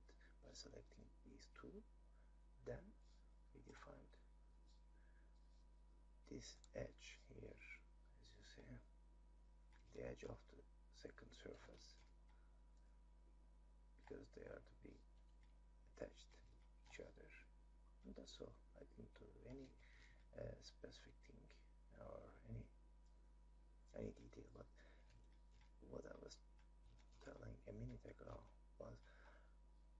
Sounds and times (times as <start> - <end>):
Speech: 0.0 - 1.9, 2.6 - 3.0, 3.6 - 4.2, 6.3 - 8.9, 9.9 - 12.0, 14.0 - 15.0, 16.0 - 22.7, 23.9 - 24.9, 25.8 - 26.4, 27.2 - 29.2.